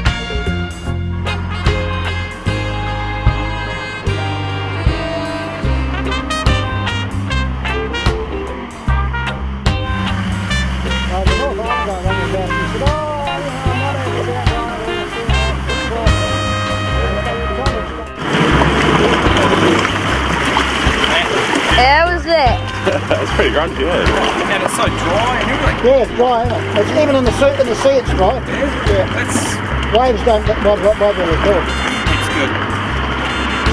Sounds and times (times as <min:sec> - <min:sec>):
Boat, Water vehicle: 0:00.0 - 0:33.7
Music: 0:00.0 - 0:33.7
Outside, rural or natural: 0:00.0 - 0:33.7
Speech: 0:11.1 - 0:18.2, 0:23.3 - 0:32.6.